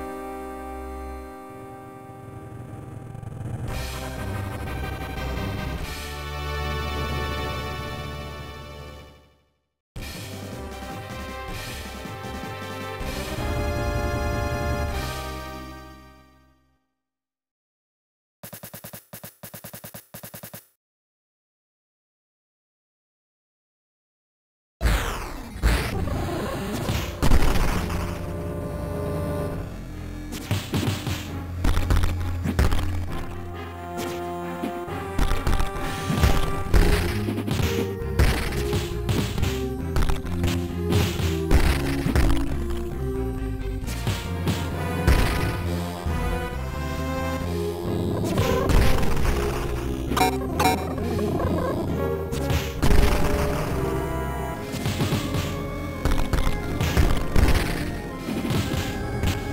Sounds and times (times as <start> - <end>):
Music: 0.0 - 17.0, 26.0 - 59.5.